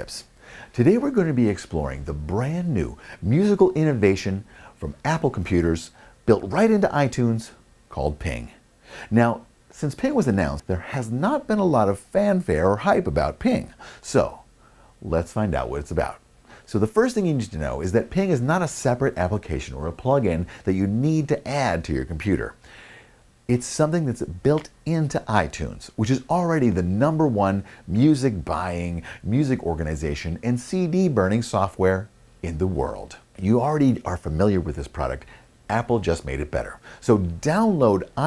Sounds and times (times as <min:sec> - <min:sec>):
Speech: 0:00.0 - 0:22.6, 0:23.5 - 0:38.2.